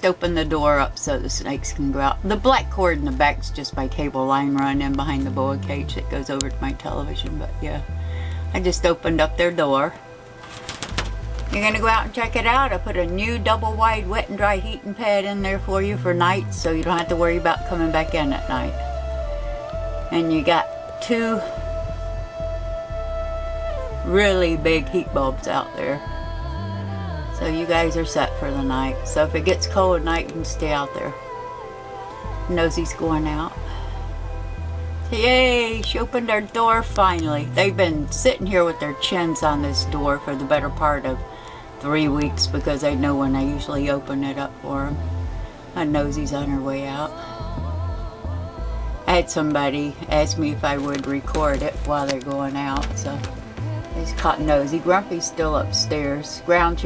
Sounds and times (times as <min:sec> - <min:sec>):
Speech: 0:00.0 - 0:07.9, 0:08.5 - 0:10.0, 0:11.5 - 0:18.9, 0:20.1 - 0:21.5, 0:24.0 - 0:26.1, 0:27.4 - 0:31.2, 0:32.5 - 0:33.6, 0:35.1 - 0:41.2, 0:41.8 - 0:45.0, 0:45.8 - 0:47.1, 0:49.1 - 0:53.3, 0:53.9 - 0:56.8
Music: 0:00.0 - 0:56.8.